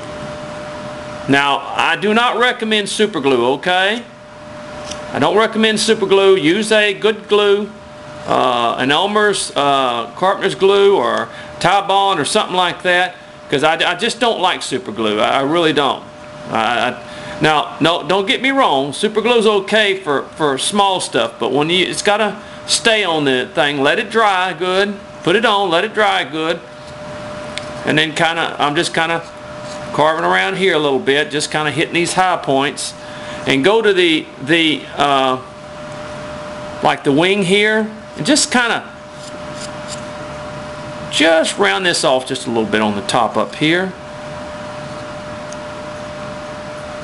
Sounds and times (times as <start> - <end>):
Speech: 1.3 - 4.1, 5.1 - 26.7, 27.8 - 29.3, 29.9 - 35.5, 36.8 - 39.0, 41.1 - 44.0.